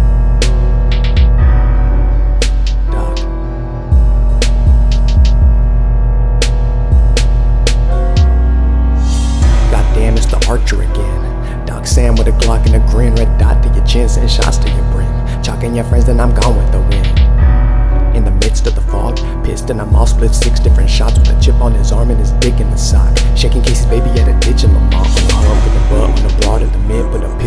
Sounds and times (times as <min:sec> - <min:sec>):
Music: 0:00.0 - 0:27.4.